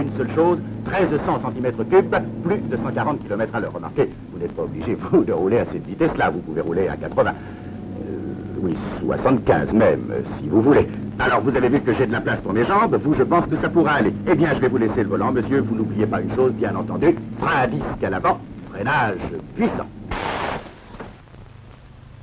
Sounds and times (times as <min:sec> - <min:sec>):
Speech: 0:00.0 - 0:07.4, 0:08.0 - 0:20.0.